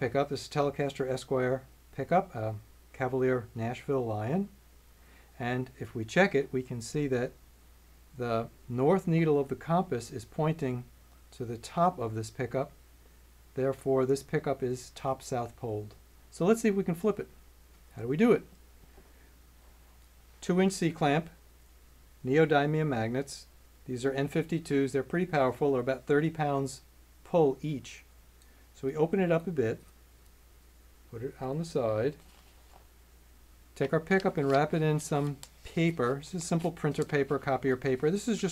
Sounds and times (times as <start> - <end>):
Speech: 0.0 - 4.6, 5.4 - 7.4, 8.2 - 12.8, 13.6 - 17.3, 17.9 - 18.5, 20.4 - 21.4, 22.2 - 28.1, 28.8 - 29.9, 31.1 - 32.2, 33.8 - 38.5.